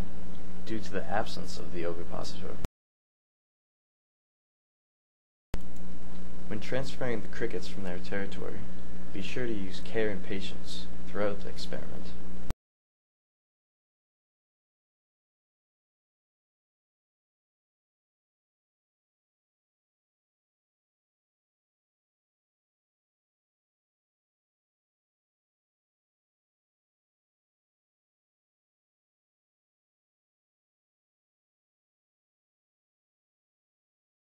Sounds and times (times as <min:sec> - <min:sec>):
Speech: 0:00.7 - 0:02.7, 0:06.5 - 0:12.2.